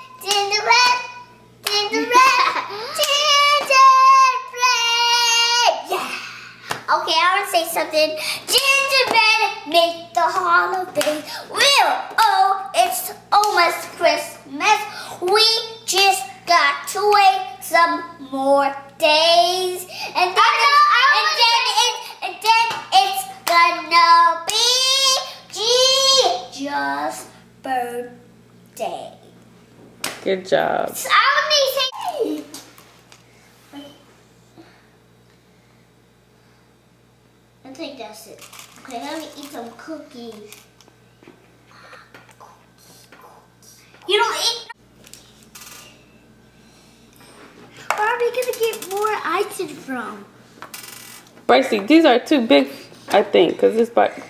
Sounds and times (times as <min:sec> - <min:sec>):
Child speech, kid speaking: 0:06.9 - 0:08.1, 0:20.2 - 0:22.0, 0:24.6 - 0:29.3, 0:31.0 - 0:32.6, 0:37.6 - 0:40.7, 0:44.0 - 0:44.8, 0:47.9 - 0:50.3
Child singing: 0:17.8 - 0:26.3.